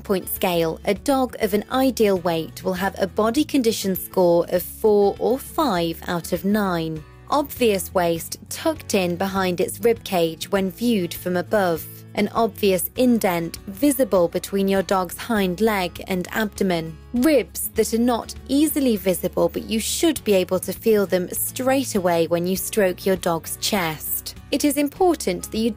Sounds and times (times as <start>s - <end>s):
Speech: 0.0s - 25.7s.